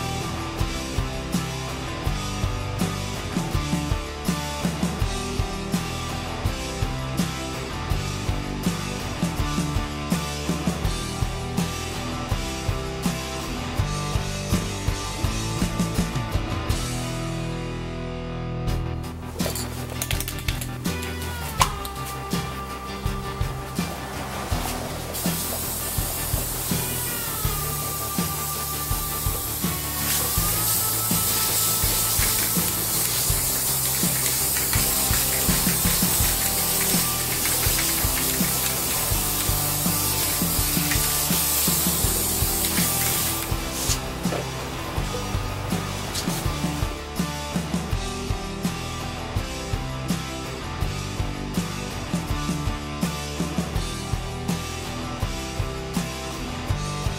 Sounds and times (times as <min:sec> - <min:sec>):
Music: 0:00.0 - 0:57.1
Spray: 0:21.1 - 0:47.0.